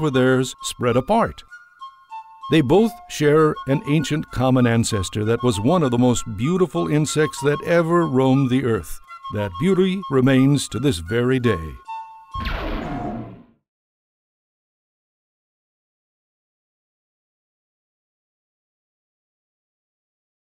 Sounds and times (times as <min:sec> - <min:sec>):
Speech: 0:00.0 - 0:01.4, 0:02.5 - 0:11.8
Music: 0:00.0 - 0:13.6.